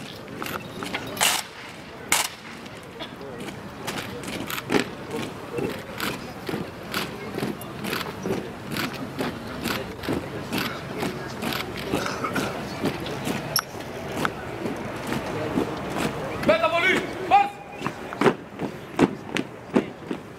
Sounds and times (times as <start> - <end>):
Speech: 2.7 - 20.2.